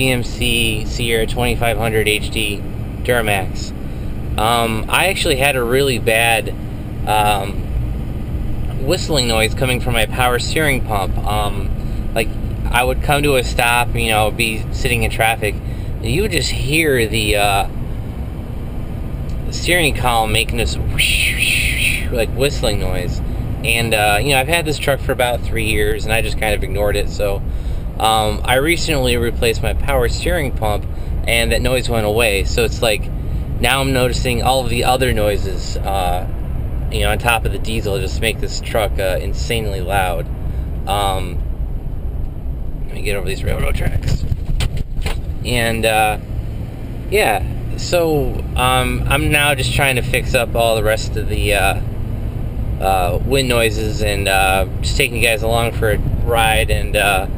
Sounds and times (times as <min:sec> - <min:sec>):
Speech: 0:00.0 - 0:03.7, 0:04.4 - 0:07.6, 0:08.7 - 0:17.7, 0:19.4 - 0:27.4, 0:28.0 - 0:36.3, 0:37.0 - 0:40.2, 0:40.9 - 0:41.4, 0:42.9 - 0:44.3, 0:45.4 - 0:46.2, 0:47.1 - 0:51.8, 0:52.8 - 0:57.3.